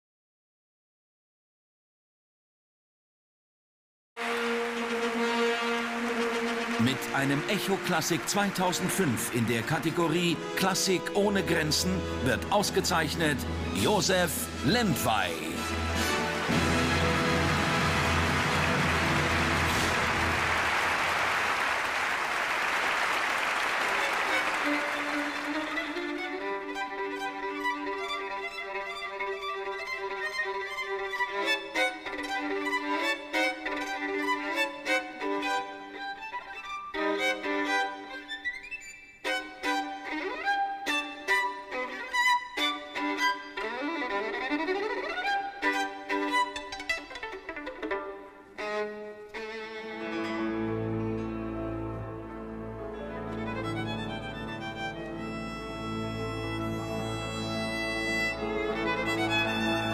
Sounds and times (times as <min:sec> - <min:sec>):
Music: 0:04.2 - 0:59.9.